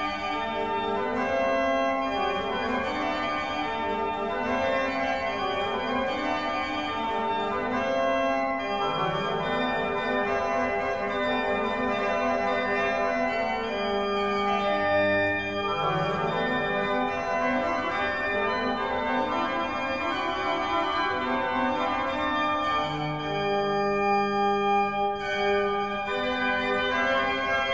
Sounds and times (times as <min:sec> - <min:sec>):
Keyboard (musical): 0:00.0 - 0:27.7.